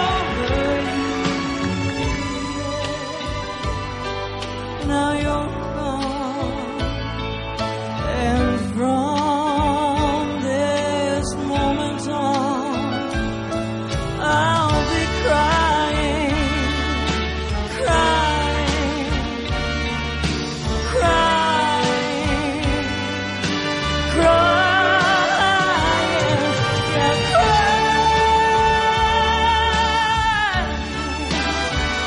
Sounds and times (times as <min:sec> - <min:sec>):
Music: 0:00.0 - 0:32.0.